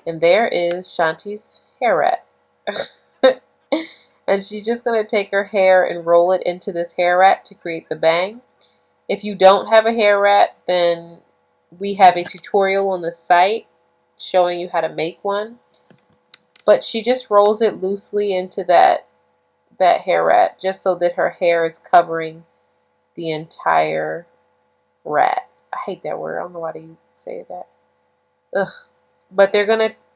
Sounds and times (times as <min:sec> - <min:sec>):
Speech: 0:00.0 - 0:08.4, 0:09.1 - 0:11.2, 0:11.8 - 0:13.6, 0:14.2 - 0:15.6, 0:16.6 - 0:19.1, 0:19.8 - 0:22.4, 0:23.2 - 0:24.2, 0:25.1 - 0:27.6, 0:28.6 - 0:28.8, 0:29.4 - 0:30.0.